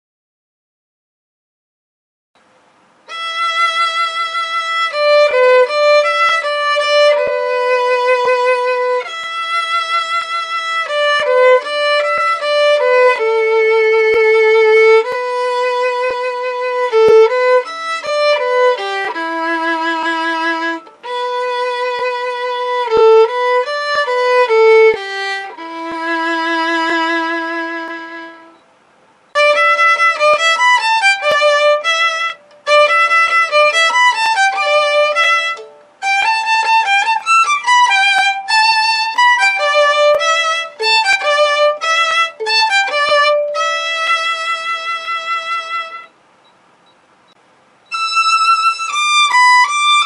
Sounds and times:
Violin, fiddle: 3.0 - 28.6, 29.3 - 46.2, 47.9 - 50.0.

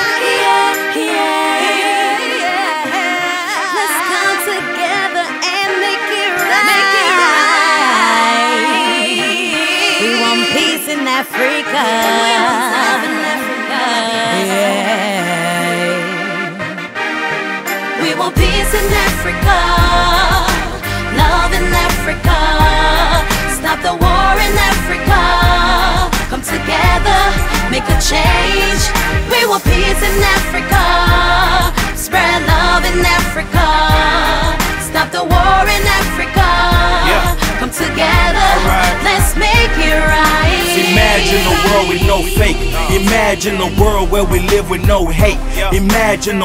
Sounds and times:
Music: 0.0 - 46.4.

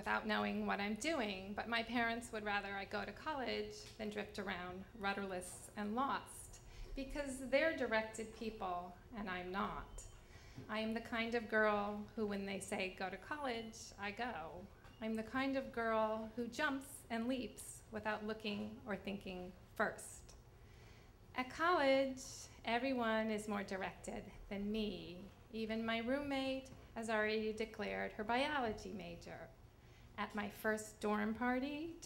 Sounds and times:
Speech: 0.0 - 10.1, 10.7 - 20.4, 21.4 - 29.5, 30.2 - 32.0.

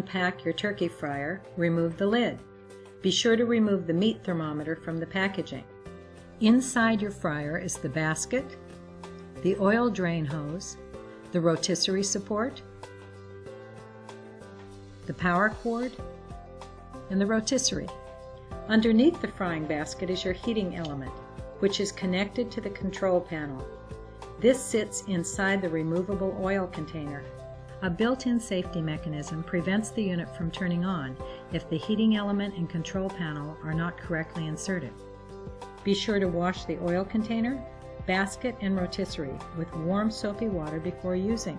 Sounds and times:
Speech: 0.0 - 2.4, 3.0 - 5.6, 6.4 - 8.5, 9.4 - 10.8, 11.4 - 12.6, 15.1 - 16.0, 17.1 - 17.9, 18.7 - 23.7, 24.4 - 35.0, 35.9 - 41.5
Music: 0.0 - 41.5.

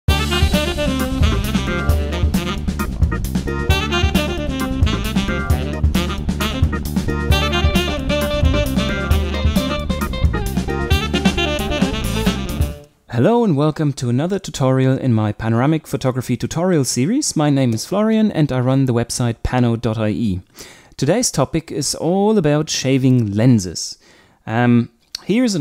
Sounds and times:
Music: 0.1 - 12.9.

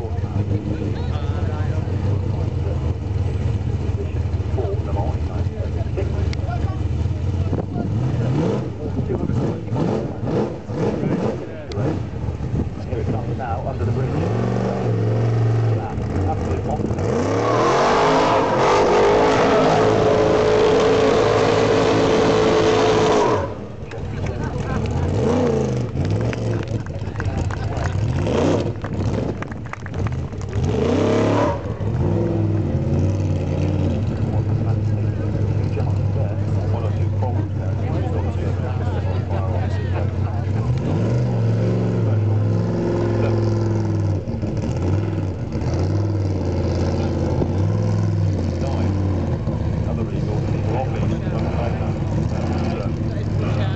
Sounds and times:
Car: 0.0 - 53.7.

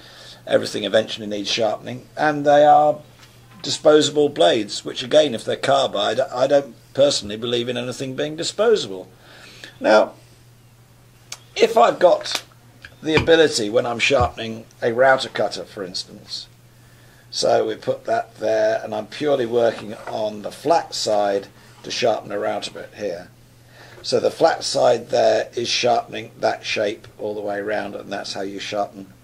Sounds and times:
Speech: 0.5 - 3.0, 3.6 - 9.1, 9.8 - 10.2, 11.6 - 16.5, 17.3 - 23.3, 24.0 - 29.2.

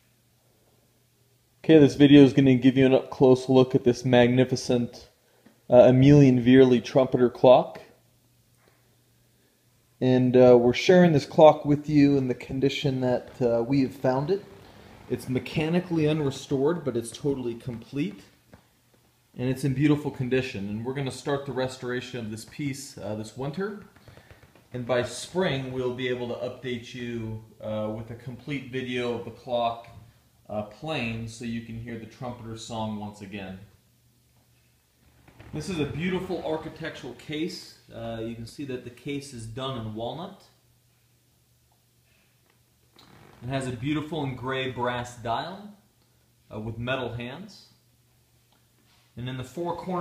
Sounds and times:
Speech: 1.6 - 8.0, 10.0 - 18.4, 19.4 - 24.0, 24.7 - 33.8, 35.5 - 40.6, 43.4 - 45.9, 46.5 - 47.8, 49.2 - 50.0.

